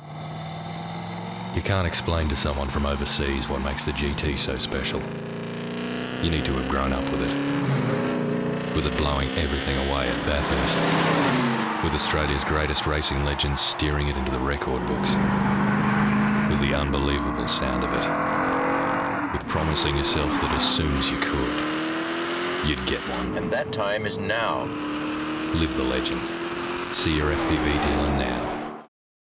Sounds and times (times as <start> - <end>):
Speech: 1.6 - 5.1, 6.2 - 7.4, 8.8 - 10.9, 11.8 - 15.2, 16.5 - 18.1, 19.4 - 21.6, 22.6 - 24.7, 25.5 - 26.3, 27.0 - 28.5.